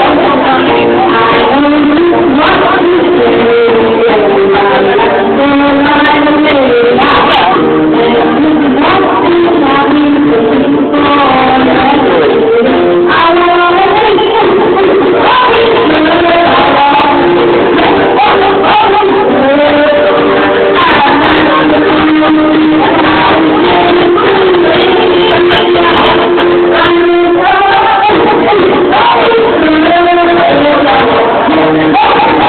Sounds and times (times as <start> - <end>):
Female singing: 0.0 - 32.4
Music: 0.0 - 32.4.